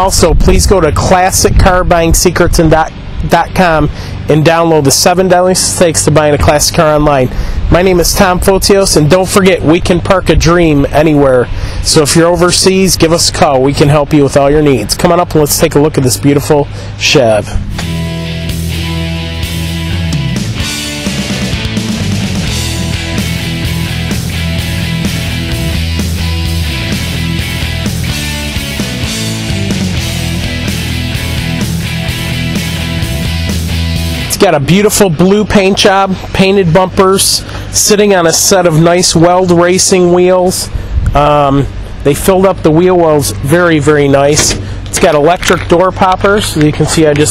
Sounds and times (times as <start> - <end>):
Speech: 0.0 - 17.6, 34.3 - 47.3.